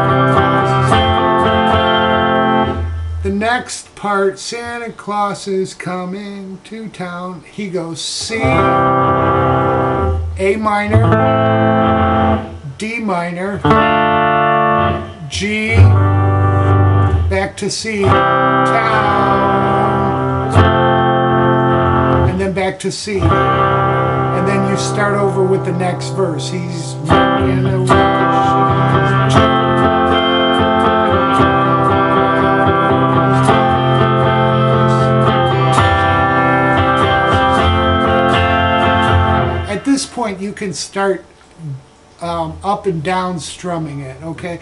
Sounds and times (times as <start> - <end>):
Guitar: 0.0 - 44.6.